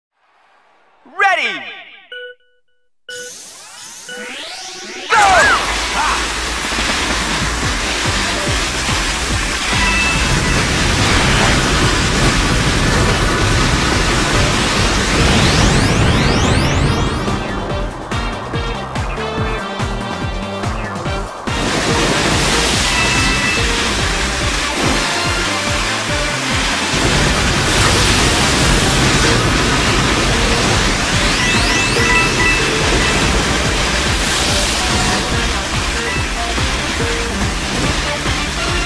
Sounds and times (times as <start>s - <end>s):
Speech: 1.1s - 2.0s, 5.1s - 6.3s
Music: 4.1s - 38.8s.